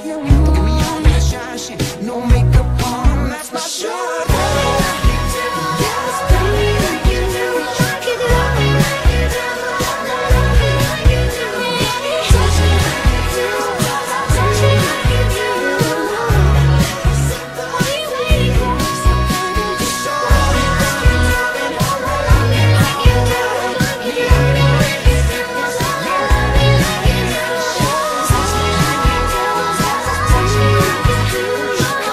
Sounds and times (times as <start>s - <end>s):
Pop music: 0.0s - 32.1s.